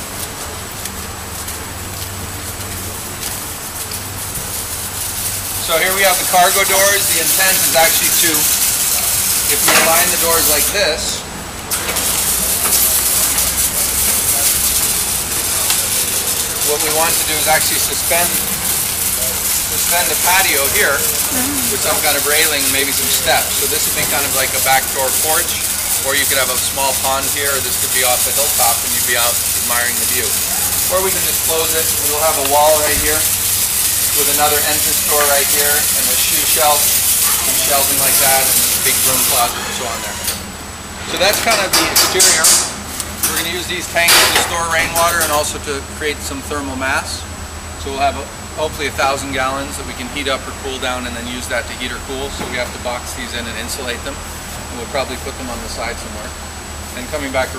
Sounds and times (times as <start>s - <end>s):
Speech: 5.6s - 11.3s, 12.3s - 18.5s, 19.1s - 33.3s, 34.1s - 40.3s, 41.0s - 57.5s.